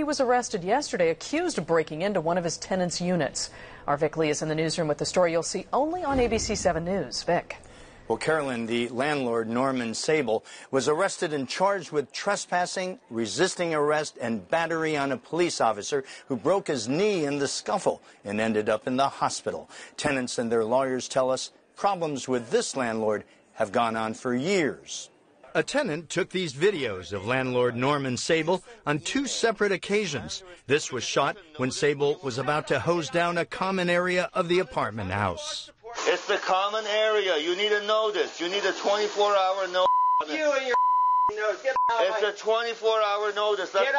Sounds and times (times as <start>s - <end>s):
Speech: 8.1s - 43.9s.